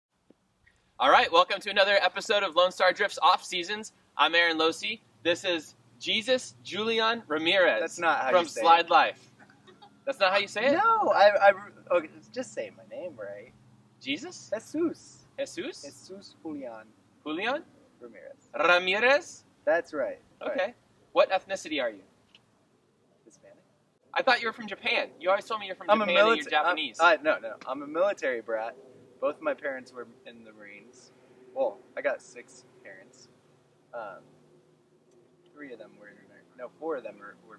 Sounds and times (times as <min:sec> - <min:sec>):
Speech: 0:01.0 - 0:09.2, 0:10.1 - 0:22.0, 0:23.3 - 0:23.6, 0:24.2 - 0:33.2, 0:34.0 - 0:34.2, 0:35.6 - 0:37.5.